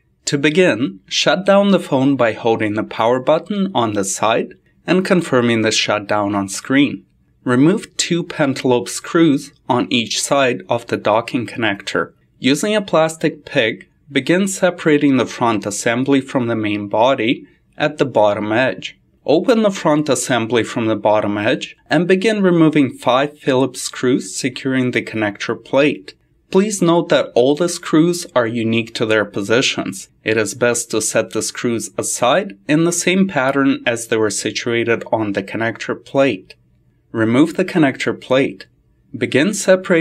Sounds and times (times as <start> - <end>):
Speech: 0.2 - 40.0.